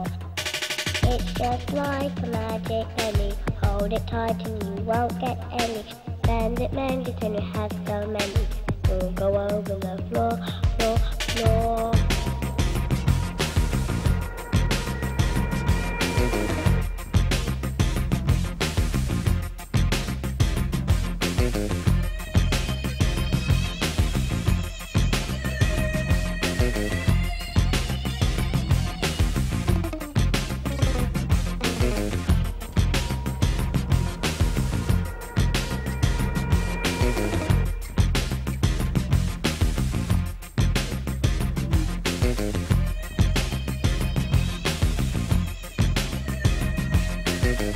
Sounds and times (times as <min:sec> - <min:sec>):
Music: 0:00.0 - 0:47.7.